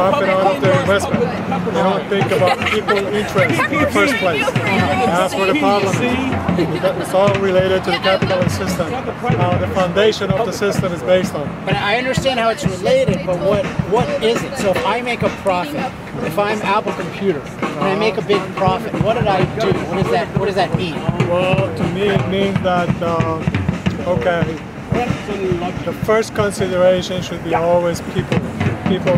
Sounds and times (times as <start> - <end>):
Music: 0.0 - 29.1
Speech: 0.0 - 29.1.